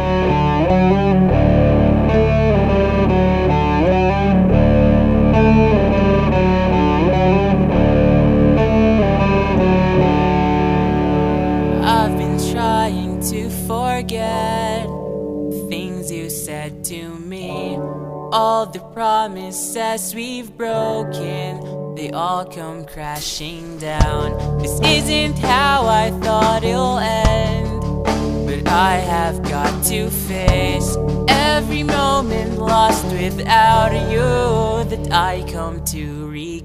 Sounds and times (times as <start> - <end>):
Background music: 0.0 - 36.6.